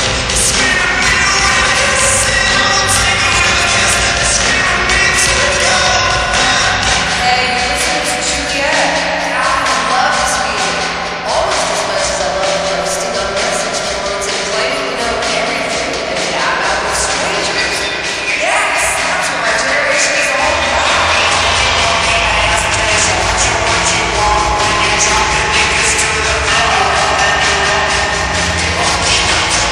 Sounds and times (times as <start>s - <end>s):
Music: 0.0s - 29.7s
Speech: 0.0s - 29.7s.